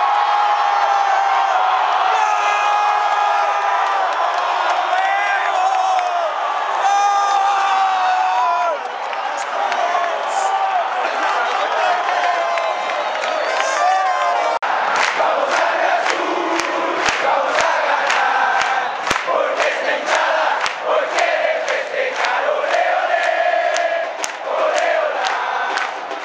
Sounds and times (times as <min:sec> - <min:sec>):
Cheering: 0:00.0 - 0:26.2
Crowd: 0:00.0 - 0:26.2.